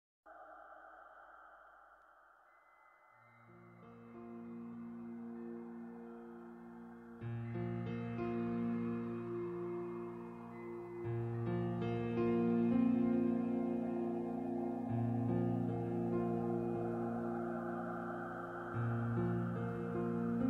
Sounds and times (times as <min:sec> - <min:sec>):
Music: 0:03.4 - 0:20.4.